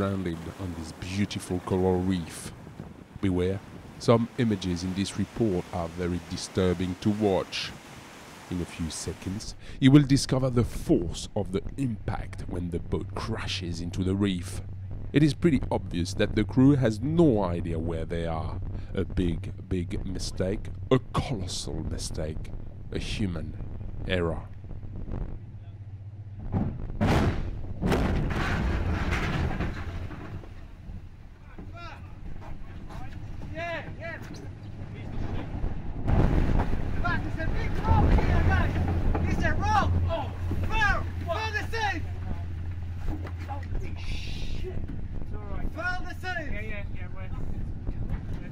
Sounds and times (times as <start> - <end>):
Speech: 0.0 - 2.5, 3.2 - 7.7, 8.5 - 14.6, 15.2 - 24.5, 37.0 - 42.4.